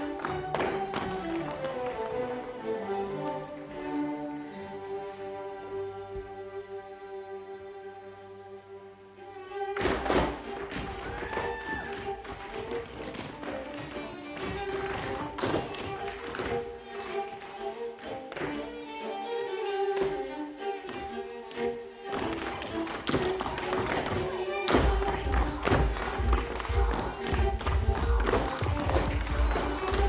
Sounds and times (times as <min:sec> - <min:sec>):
Music: 0:00.0 - 0:30.0.